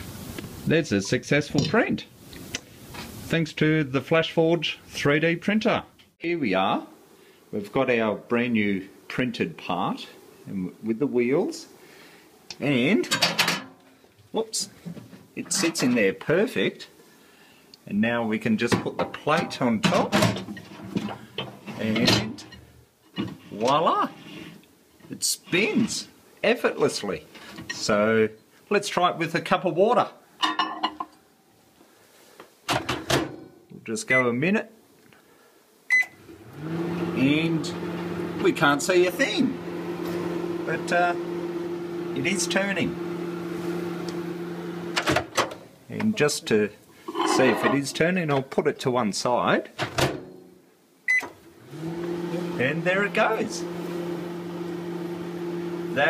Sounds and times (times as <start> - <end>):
Speech: 0.7 - 2.1, 3.3 - 6.9, 7.5 - 11.7, 12.5 - 13.2, 14.3 - 14.8, 15.4 - 17.0, 17.8 - 20.4, 21.7 - 22.5, 23.5 - 24.2, 25.1 - 30.2, 33.8 - 34.8, 37.2 - 37.8, 38.4 - 39.6, 40.7 - 41.2, 42.2 - 43.0, 45.9 - 49.8, 52.6 - 53.7
Microwave oven: 36.1 - 45.3, 51.5 - 56.1.